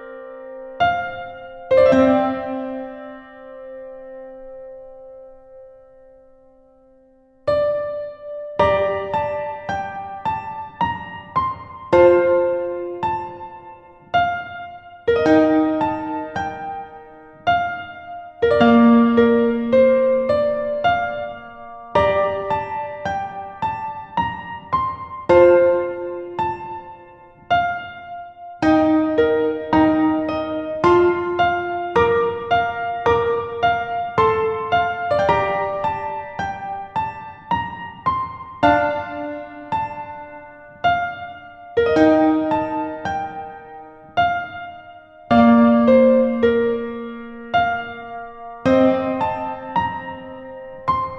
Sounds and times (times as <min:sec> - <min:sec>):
Electric piano: 0:00.0 - 0:51.1.